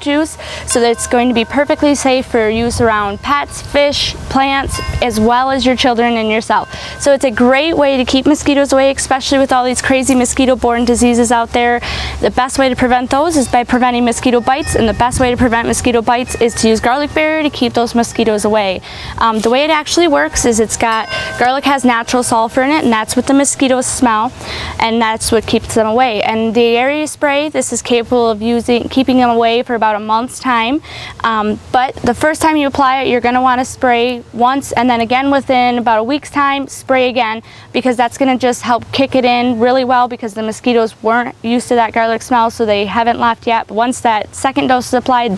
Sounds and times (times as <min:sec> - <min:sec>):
Speech: 0:00.0 - 0:45.3.